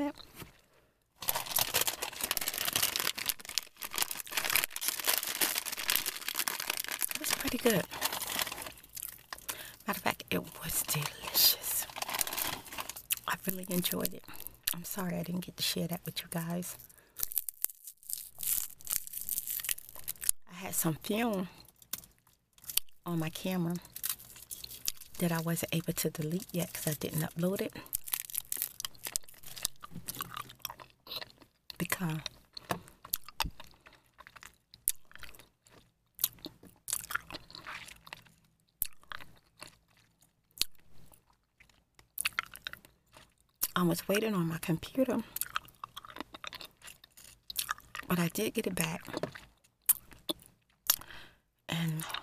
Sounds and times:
Speech: 7.2s - 7.9s, 9.8s - 11.9s, 13.3s - 16.8s, 20.5s - 21.6s, 23.1s - 23.8s, 25.2s - 27.8s, 31.8s - 32.3s, 43.7s - 45.3s, 48.1s - 49.2s.

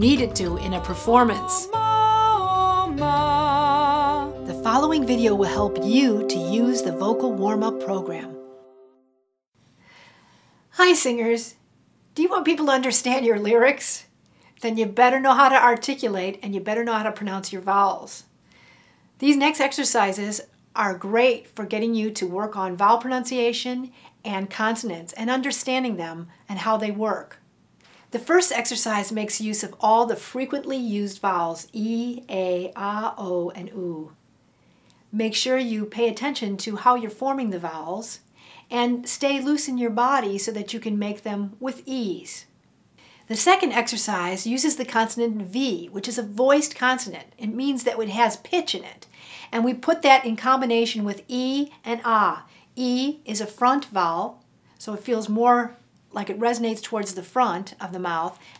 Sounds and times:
Speech: 0.0s - 1.8s, 4.5s - 8.4s, 10.8s - 11.6s, 12.2s - 18.3s, 19.2s - 27.4s, 28.2s - 34.2s, 35.1s - 42.5s, 43.3s - 58.4s.

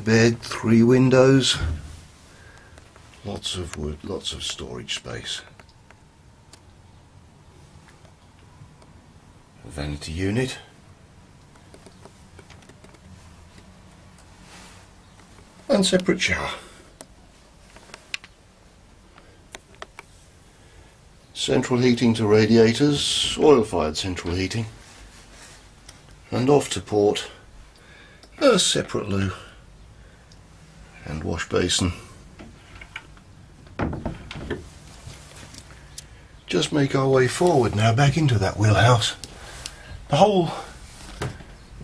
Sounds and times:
Speech: 0.0s - 1.9s, 3.2s - 5.6s, 9.6s - 10.8s, 15.7s - 16.8s, 21.4s - 24.8s, 26.3s - 27.4s, 28.4s - 29.6s, 31.0s - 32.2s, 36.5s - 39.3s, 40.1s - 40.8s.

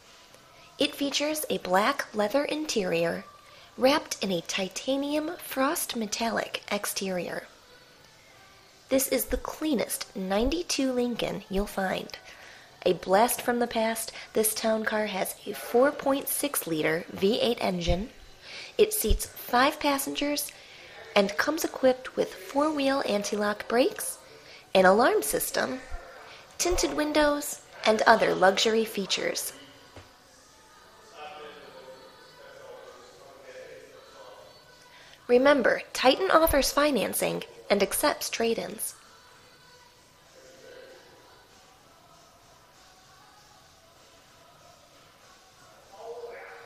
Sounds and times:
Speech: 0.8s - 7.5s, 12.8s - 18.2s, 18.8s - 24.2s, 24.8s - 29.6s.

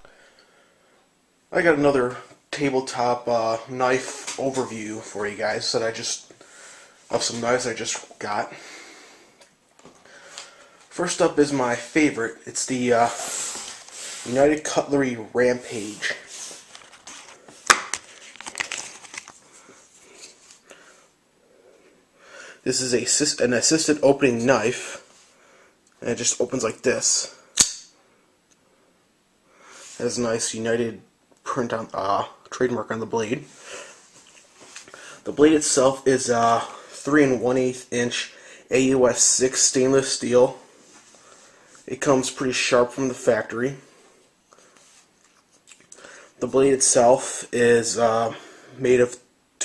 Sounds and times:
Speech: 1.5s - 6.3s, 7.1s - 8.6s, 10.9s - 13.3s, 14.2s - 16.3s, 22.6s - 25.1s, 26.0s - 27.4s, 30.0s - 33.5s, 35.2s - 40.7s, 41.9s - 43.9s, 46.4s - 49.6s.

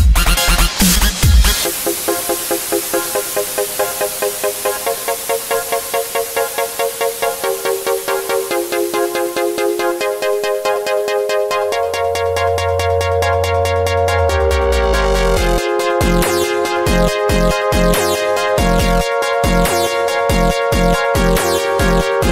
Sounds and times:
Electronic dance music: 0.0s - 22.3s.

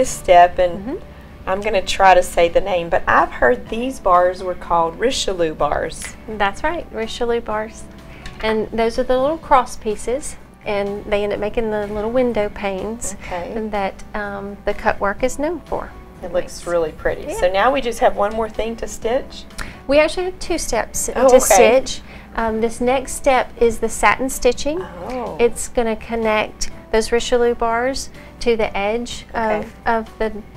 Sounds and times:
Music: 0.0s - 30.5s
Speech: 8.4s - 19.4s, 20.0s - 22.0s, 24.3s - 26.5s, 28.9s - 30.4s.

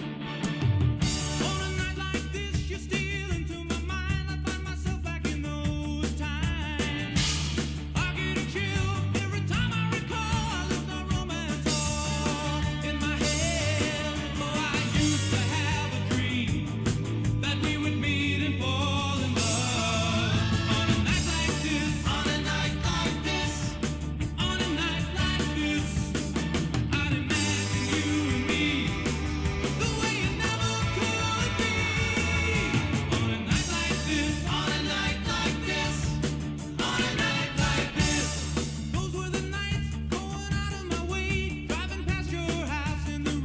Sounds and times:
Music: 0.0s - 43.4s.

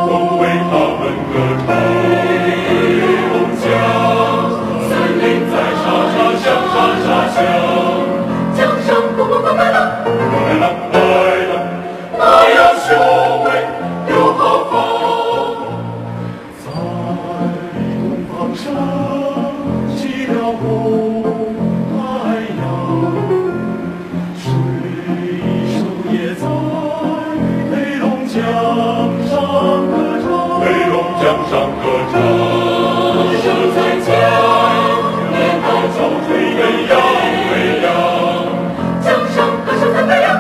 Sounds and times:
Music: 0.0s - 40.4s.

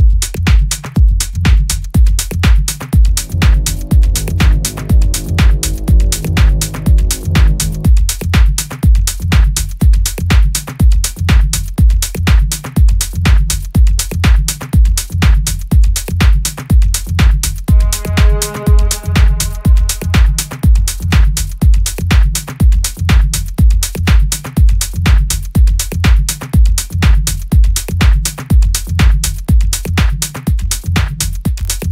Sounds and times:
Disco: 0.0s - 31.9s.

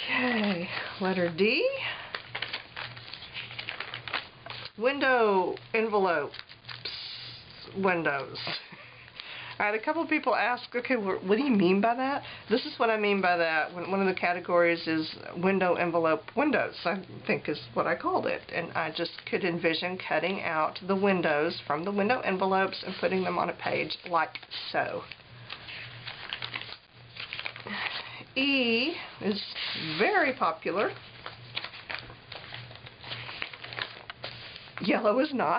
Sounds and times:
Speech: 0.2s - 1.9s, 4.8s - 6.4s, 7.7s - 8.5s, 9.6s - 25.1s, 28.4s - 31.0s, 34.8s - 35.5s.

